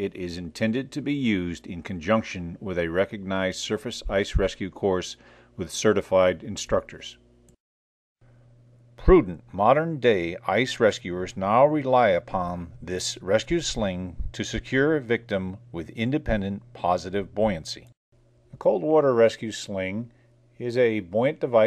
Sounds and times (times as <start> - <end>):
Speech: 0.0 - 7.2, 9.0 - 18.0, 18.6 - 21.6.